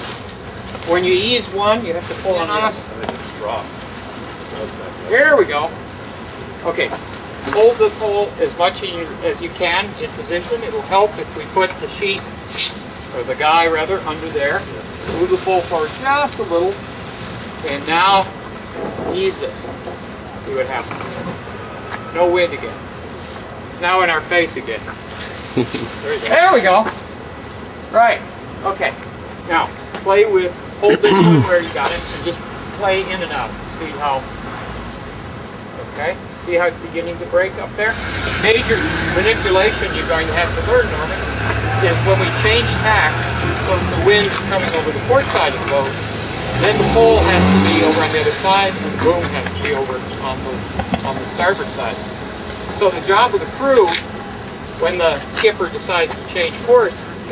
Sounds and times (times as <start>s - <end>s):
Vehicle: 0.0s - 57.3s
Speech: 0.8s - 3.7s, 6.6s - 12.3s, 13.1s - 16.8s, 17.6s - 18.3s, 19.1s - 19.7s, 20.5s - 21.0s, 25.6s - 27.0s, 27.9s - 34.3s, 35.8s - 46.0s, 46.6s - 52.0s, 52.8s - 54.1s, 54.8s - 57.3s.